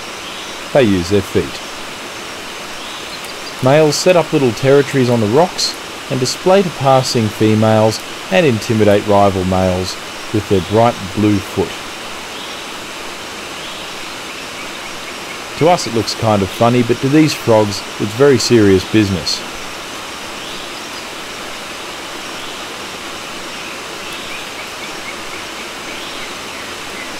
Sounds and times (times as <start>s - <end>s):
Stream: 0.0s - 27.2s.